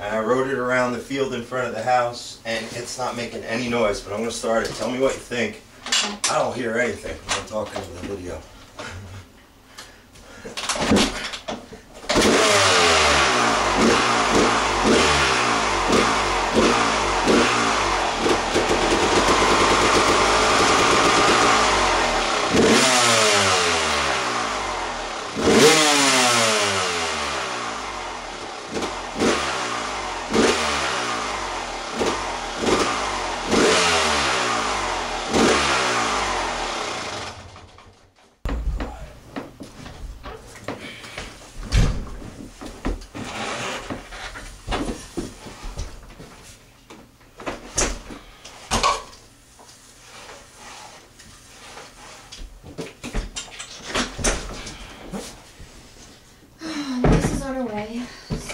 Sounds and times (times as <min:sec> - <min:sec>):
Medium engine (mid frequency): 0:12.0 - 0:38.2
Vehicle: 0:12.1 - 0:38.1
Accelerating, revving, vroom: 0:12.2 - 0:28.2, 0:28.8 - 0:37.3.